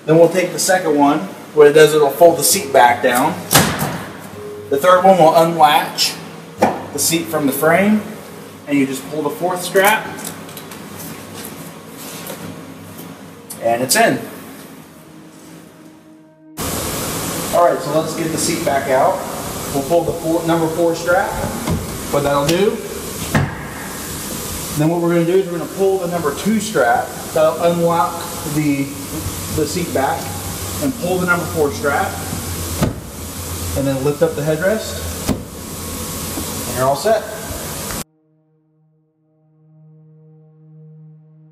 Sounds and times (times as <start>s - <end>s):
Speech: 0.1s - 3.4s, 7.0s - 8.1s, 8.7s - 10.2s, 13.6s - 14.3s, 17.6s - 22.9s, 24.8s - 32.3s, 33.8s - 35.0s, 36.7s - 37.5s.